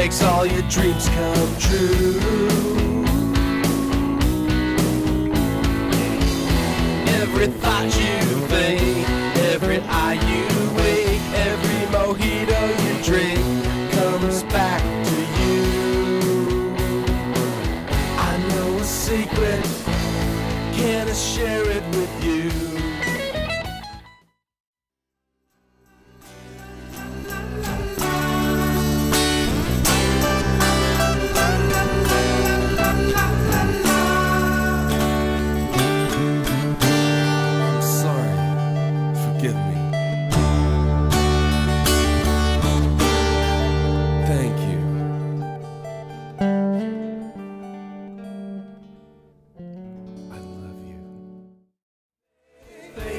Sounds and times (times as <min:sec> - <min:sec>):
Music: 0:00.0 - 0:24.5, 0:25.2 - 0:53.1.